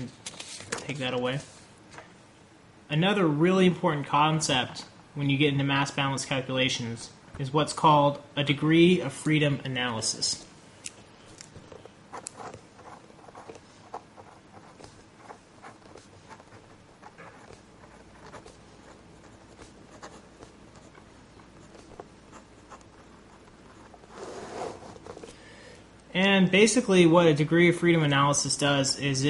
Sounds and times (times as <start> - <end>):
Speech: 0.8 - 1.5, 2.9 - 10.5, 26.1 - 29.2
Writing: 11.7 - 25.3.